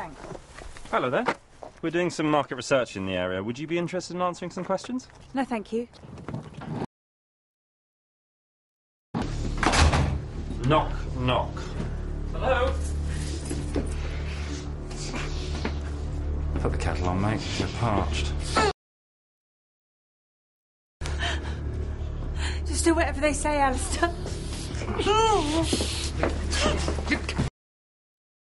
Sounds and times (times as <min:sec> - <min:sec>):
Music: 0:09.2 - 0:18.8, 0:21.0 - 0:27.5.